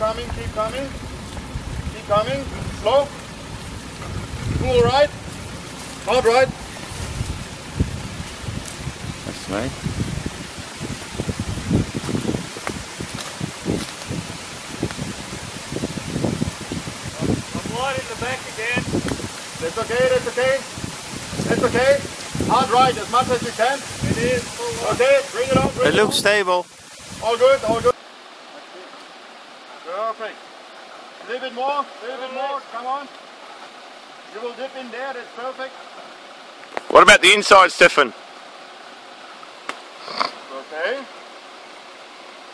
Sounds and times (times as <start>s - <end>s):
Outside, rural or natural: 0.0s - 42.5s.